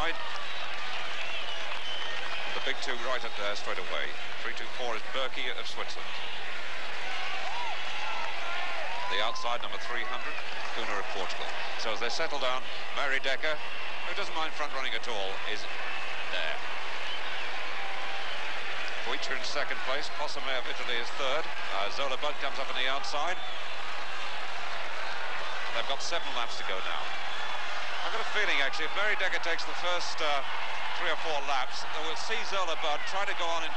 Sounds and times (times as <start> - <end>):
Speech: 2.6 - 6.2, 9.0 - 15.7, 16.3 - 16.6, 19.0 - 23.4, 25.7 - 27.0, 28.0 - 33.7.